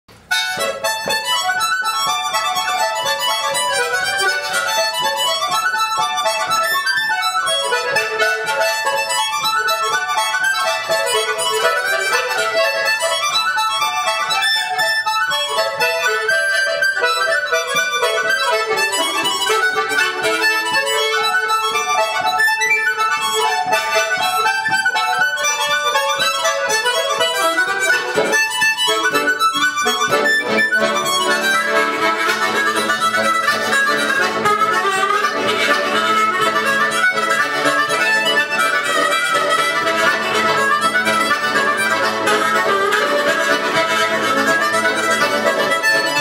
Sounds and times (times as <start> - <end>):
Accordion: 0.1 - 46.2
Harmonica: 0.1 - 46.2
Wind instrument, woodwind instrument: 0.1 - 46.2.